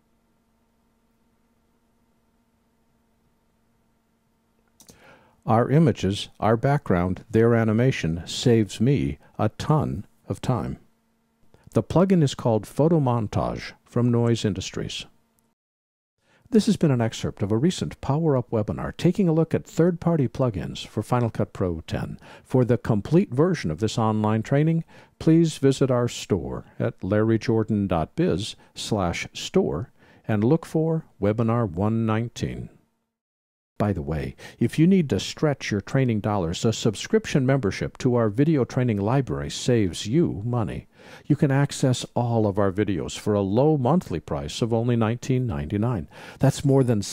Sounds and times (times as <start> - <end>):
Speech: 5.4 - 10.9, 11.7 - 15.2, 16.5 - 32.8, 33.8 - 47.1.